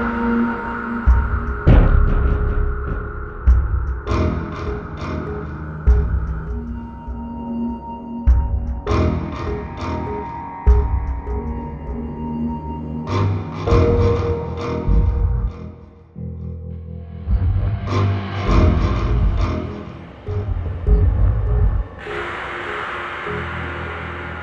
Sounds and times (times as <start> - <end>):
Music: 0.0 - 24.4.